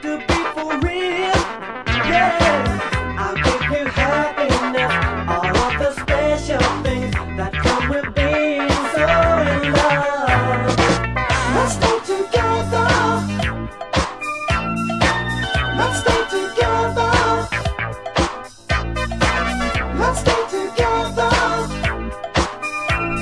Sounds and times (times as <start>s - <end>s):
Disco: 0.0s - 23.2s
Rhythm and blues: 0.0s - 23.2s.